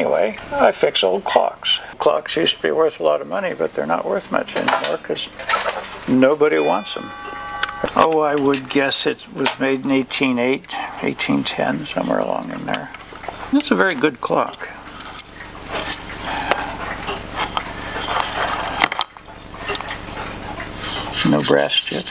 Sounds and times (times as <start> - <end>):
Speech: 0.0 - 5.4, 6.1 - 7.1, 8.0 - 14.8, 21.2 - 22.1.